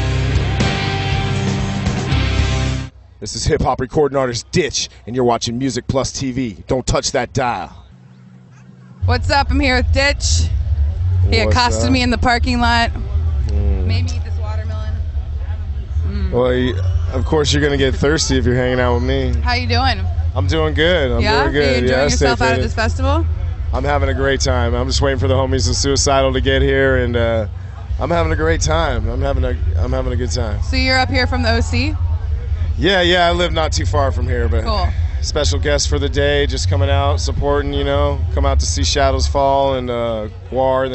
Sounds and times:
Speech: 3.2 - 7.8, 11.3 - 12.9, 13.5 - 14.8, 16.1 - 23.2, 23.8 - 32.0, 32.7 - 40.9.

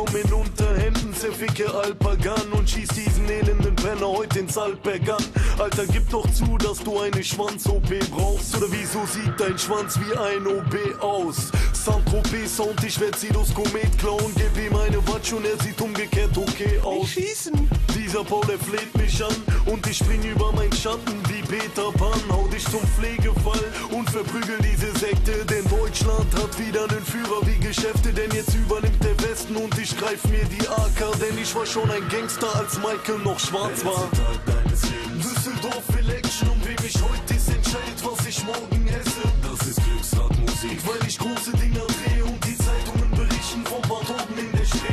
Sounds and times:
Music: 0.0 - 44.9.

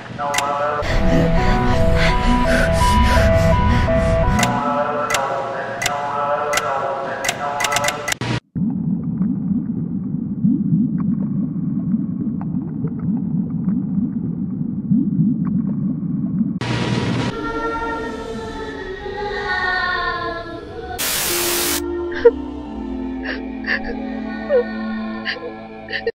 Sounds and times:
Static: 21.0 - 21.8.

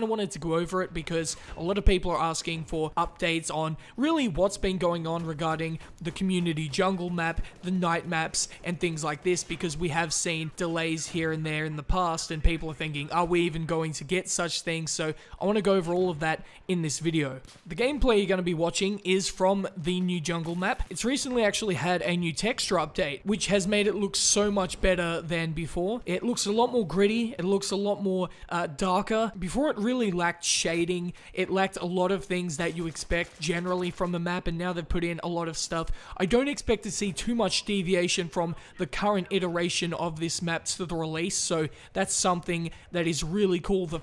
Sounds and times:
Speech: 0.0 - 44.0.

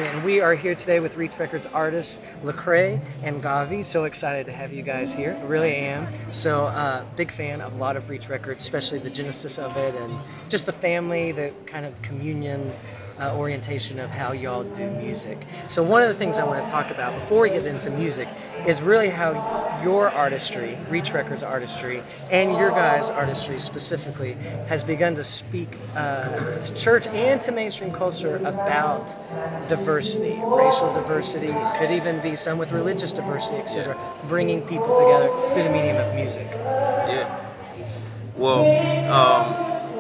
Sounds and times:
Speech: 0.0 - 37.3, 38.4 - 39.7
Music: 0.0 - 40.0.

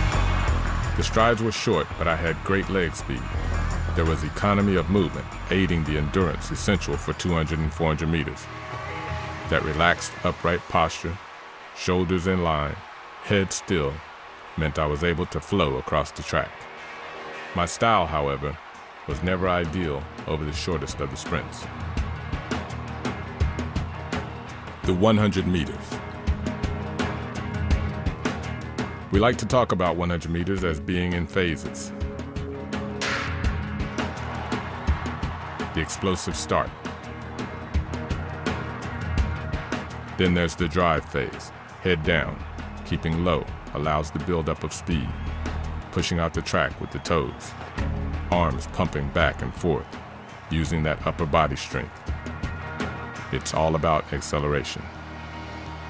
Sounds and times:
Music: 0.0 - 55.8
Speech: 1.0 - 8.5, 9.5 - 11.2, 11.8 - 14.0, 14.6 - 16.6, 17.6 - 21.7, 24.8 - 26.0, 29.1 - 32.0, 35.7 - 36.8, 40.2 - 45.2, 45.9 - 47.6, 48.3 - 49.9, 50.5 - 52.0, 53.3 - 54.9.

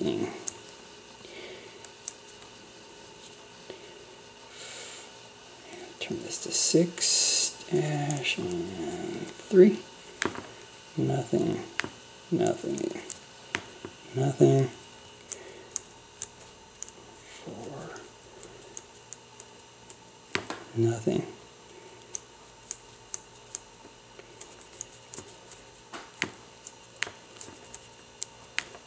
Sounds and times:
Speech: 0.0 - 0.4, 6.0 - 9.8, 11.0 - 11.7, 12.3 - 13.1, 14.1 - 14.8, 17.4 - 18.0, 20.7 - 21.4.

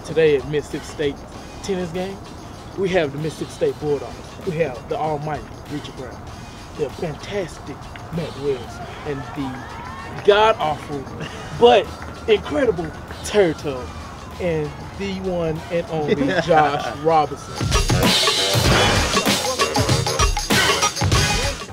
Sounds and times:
Speech: 0.0 - 2.2, 2.8 - 6.2, 6.8 - 9.6, 10.2 - 13.8, 14.4 - 18.8, 19.6 - 20.2
Music: 0.0 - 21.7.

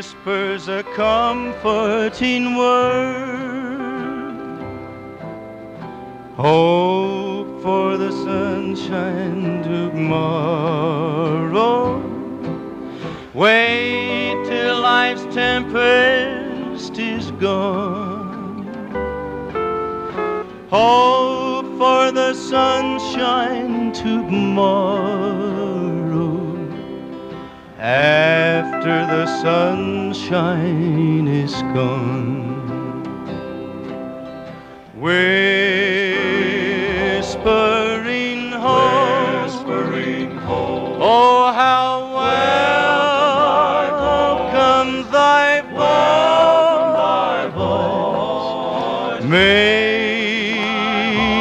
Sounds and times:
Music: 0.0 - 51.4.

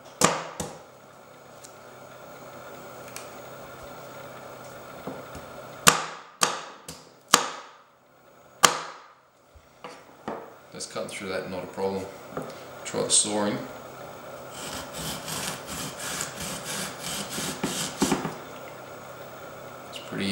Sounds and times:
Speech: 10.7 - 12.2, 12.8 - 13.8, 19.9 - 20.3.

